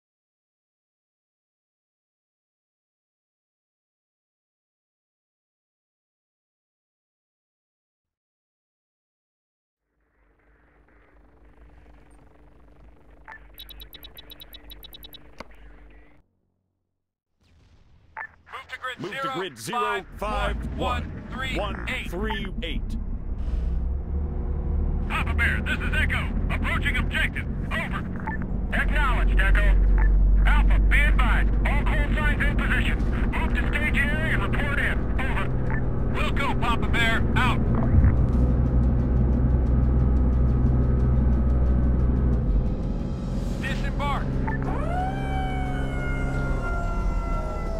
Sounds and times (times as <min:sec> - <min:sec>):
Speech: 0:18.5 - 0:23.0, 0:25.1 - 0:28.1, 0:28.7 - 0:35.5, 0:36.2 - 0:37.6, 0:43.6 - 0:44.8.